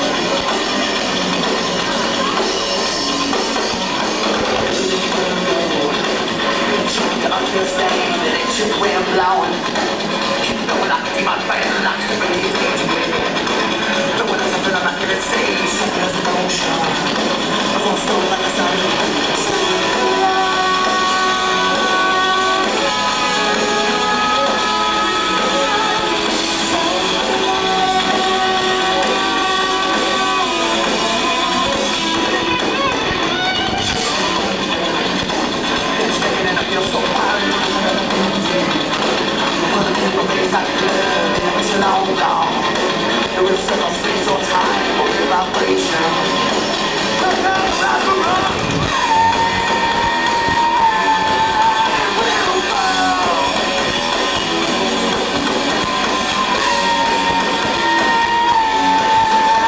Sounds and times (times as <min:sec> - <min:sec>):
Music: 0:00.0 - 0:59.6.